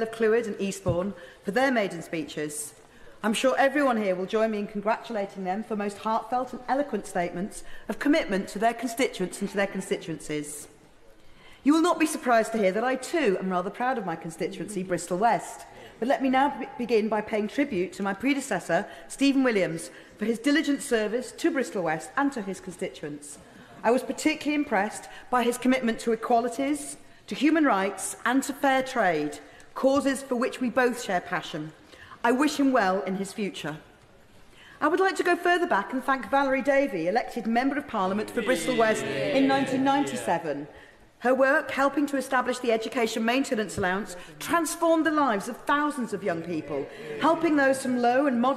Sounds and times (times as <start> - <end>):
Female speech, woman speaking: 0.0 - 10.7, 11.7 - 33.8, 34.8 - 48.5
Narration, monologue: 0.0 - 48.5.